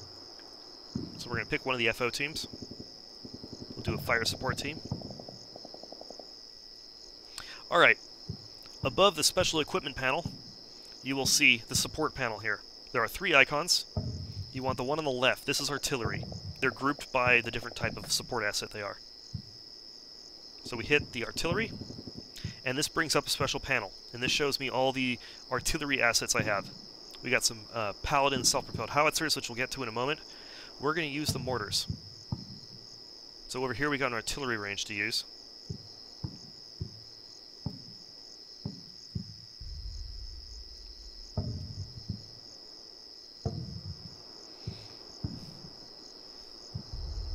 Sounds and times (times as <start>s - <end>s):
Outside, rural or natural: 0.0s - 47.3s
Speech: 1.2s - 2.5s, 3.8s - 4.8s, 7.6s - 8.0s, 8.8s - 10.3s, 11.0s - 13.9s, 14.6s - 19.0s, 20.7s - 21.7s, 22.6s - 30.2s, 30.8s - 31.9s, 33.5s - 35.3s.